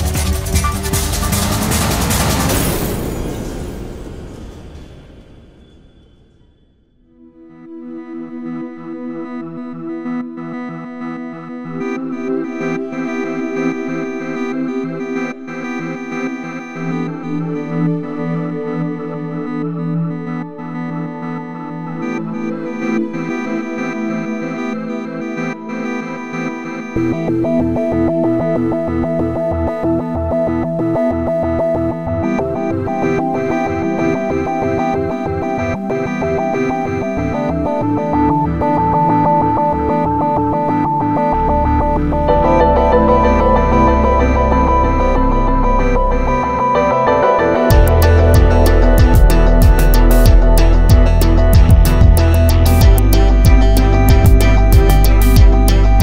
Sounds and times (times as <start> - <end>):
Effects unit: 0.0 - 2.3, 7.3 - 56.0
Synthesizer: 0.0 - 56.0.